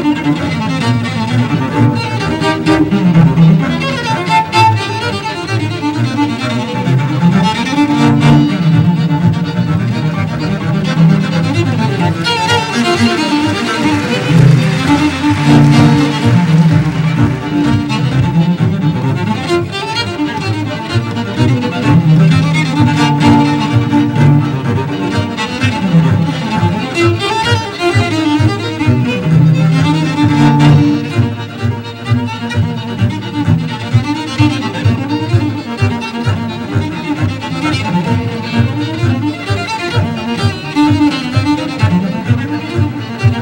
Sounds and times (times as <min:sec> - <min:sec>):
Cello: 0:00.0 - 0:43.4
Double bass: 0:00.0 - 0:43.4
Violin, fiddle: 0:00.0 - 0:43.4.